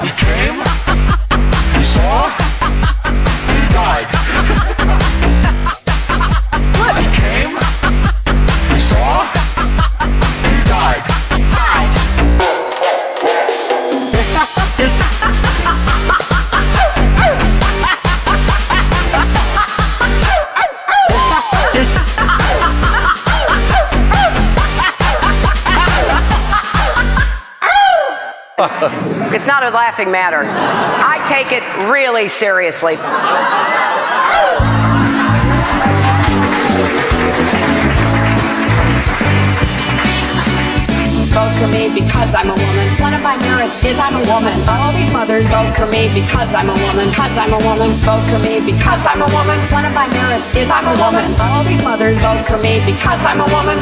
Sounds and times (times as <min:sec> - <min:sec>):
Music: 0:00.0 - 0:27.4, 0:34.6 - 0:53.8.